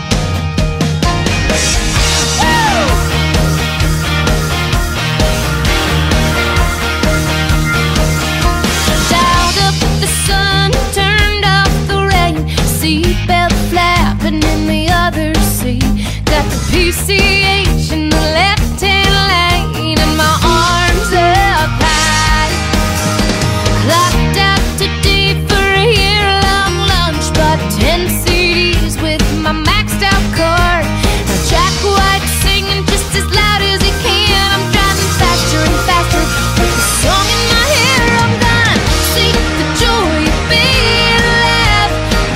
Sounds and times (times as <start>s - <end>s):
Disco: 0.0s - 42.3s.